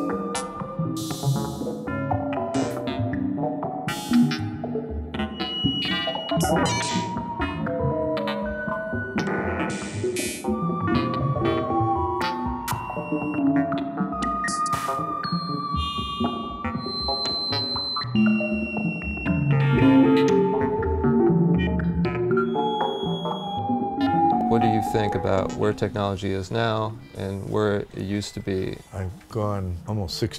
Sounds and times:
Music: 0.0 - 30.3.

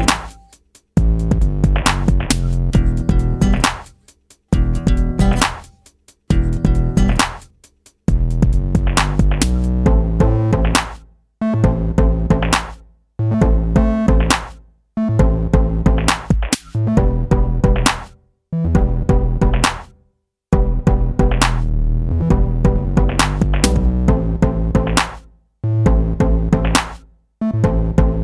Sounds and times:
Synthesizer: 0.0 - 7.5, 8.1 - 28.2
Drum machine: 0.0 - 12.8, 13.4 - 14.6, 15.2 - 18.2, 18.8 - 21.7, 22.3 - 25.3, 25.9 - 27.0.

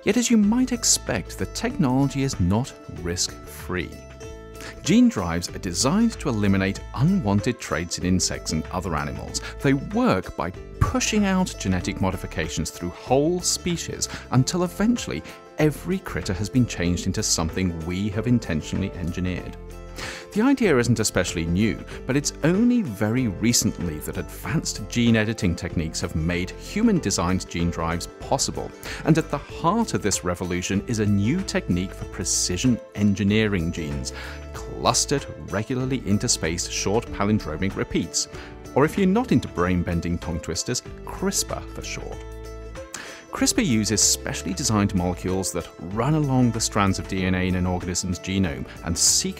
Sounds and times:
Speech: 0.0 - 4.0, 4.6 - 19.6, 20.2 - 42.2, 43.3 - 49.3
Music: 0.0 - 49.3.

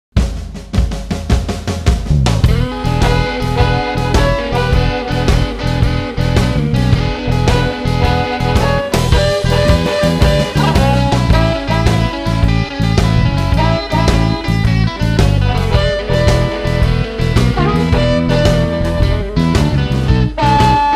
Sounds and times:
Bass drum: 0.2 - 20.9.

